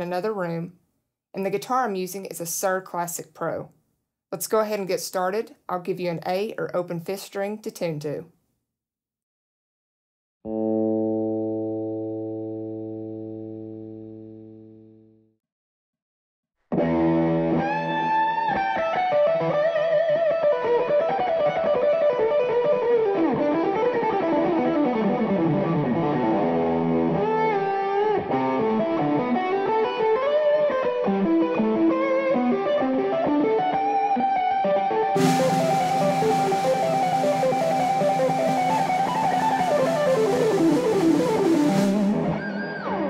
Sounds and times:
Guitar: 10.5 - 15.1, 16.7 - 43.0.

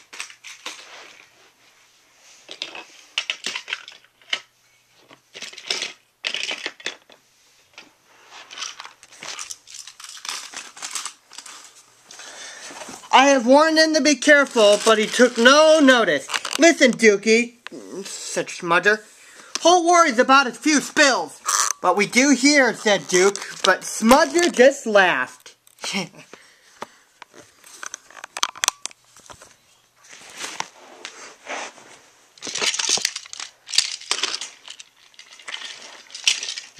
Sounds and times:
Inside, small room: 0.0 - 36.7
Speech: 13.1 - 26.3.

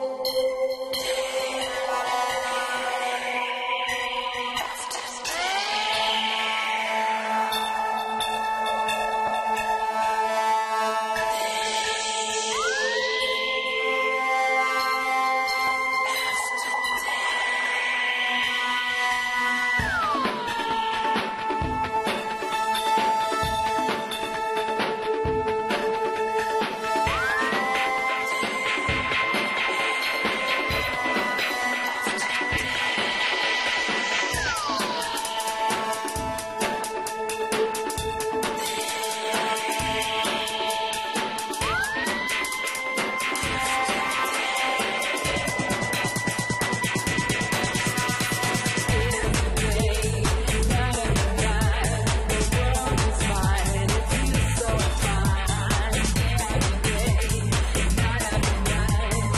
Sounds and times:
Music: 0.0 - 59.3.

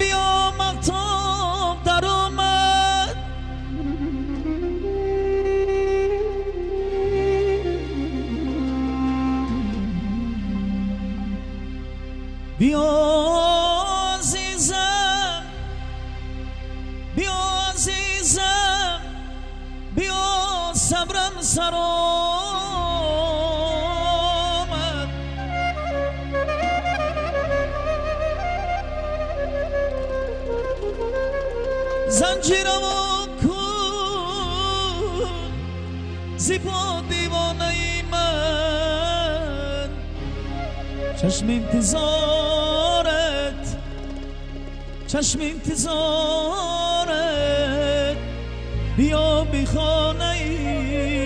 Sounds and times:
New-age music: 0.0 - 51.2.

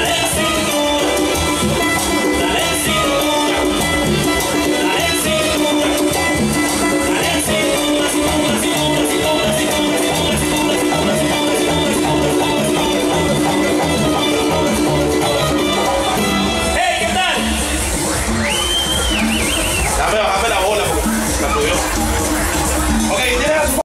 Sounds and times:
Music: 0.0 - 23.8
Speech: 16.8 - 17.6, 20.0 - 21.9, 23.1 - 23.8.

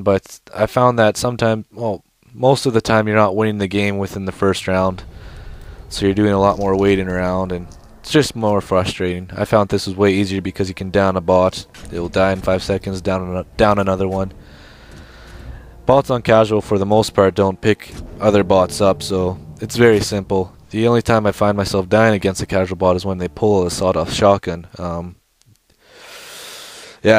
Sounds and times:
Speech: 0.0 - 5.1, 5.9 - 14.4, 15.9 - 25.2
Music: 3.7 - 24.8.

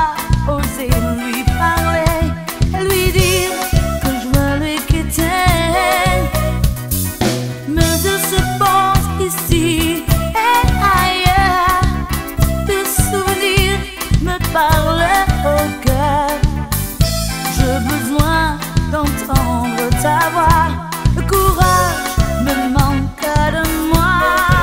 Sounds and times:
Music: 0.0 - 24.6.

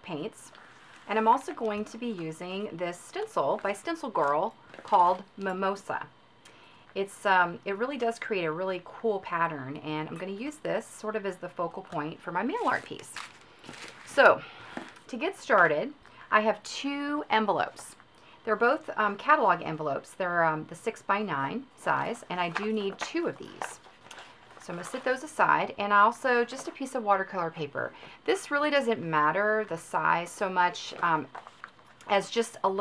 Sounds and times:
Speech: 0.0 - 6.1, 7.0 - 13.2, 14.1 - 14.4, 15.1 - 23.8, 24.6 - 31.3, 32.1 - 32.8.

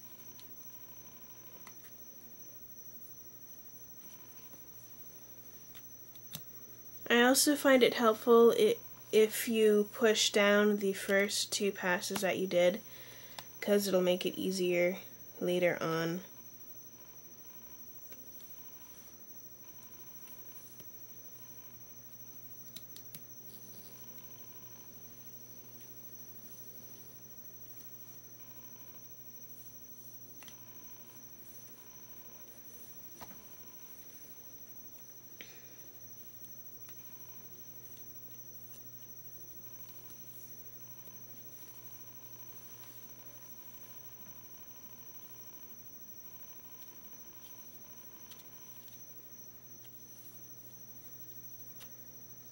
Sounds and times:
Inside, small room: 0.0 - 52.5.

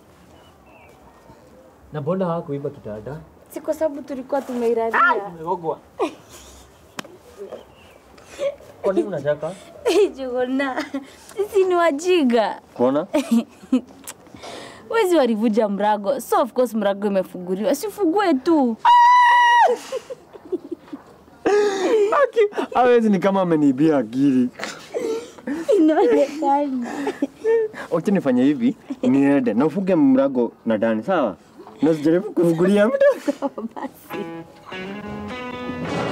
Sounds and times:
Snicker: 19.7 - 22.7, 32.8 - 34.0.

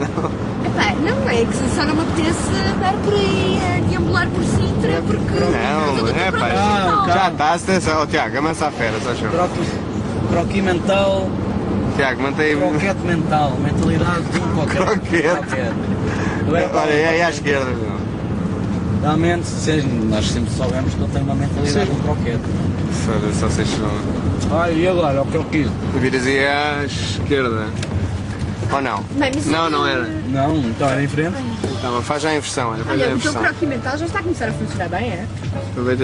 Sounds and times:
Car: 0.0 - 36.0.

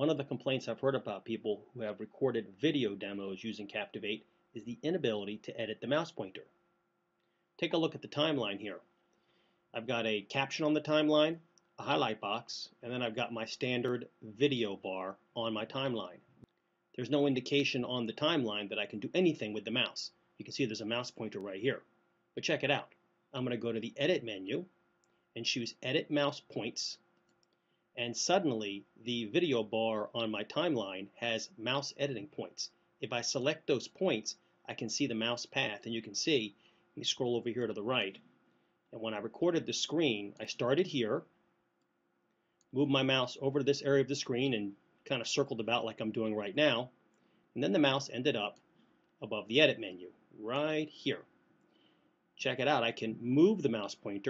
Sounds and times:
Speech: 0.0 - 6.5, 7.6 - 8.8, 9.8 - 16.2, 17.0 - 21.8, 22.4 - 24.7, 25.4 - 27.0, 28.0 - 38.2, 39.0 - 41.3, 42.8 - 46.9, 47.6 - 48.6, 49.2 - 51.3, 52.4 - 54.2.

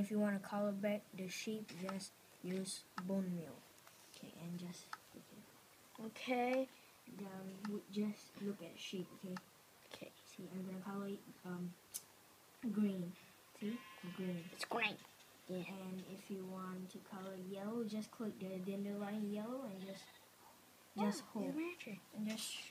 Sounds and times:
Speech: 0.0 - 3.6, 4.2 - 5.4, 6.0 - 11.8, 12.6 - 20.1, 21.0 - 22.7.

